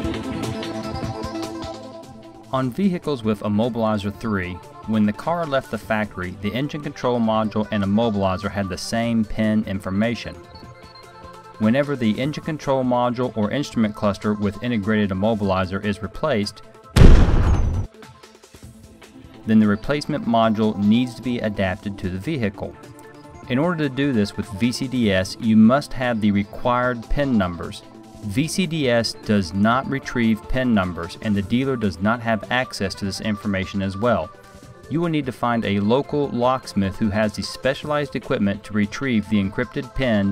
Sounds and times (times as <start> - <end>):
Music: 0.0 - 40.3
Speech: 2.5 - 10.4, 11.6 - 16.6, 19.4 - 22.8, 23.5 - 34.3, 34.9 - 40.3.